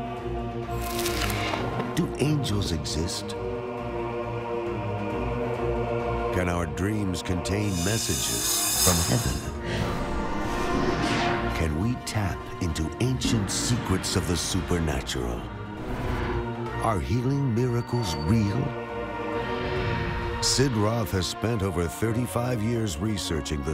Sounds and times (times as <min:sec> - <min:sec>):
Music: 0:00.0 - 0:23.7
Speech: 0:02.0 - 0:03.4, 0:06.3 - 0:09.5, 0:11.5 - 0:15.5, 0:16.8 - 0:18.8, 0:20.4 - 0:23.7.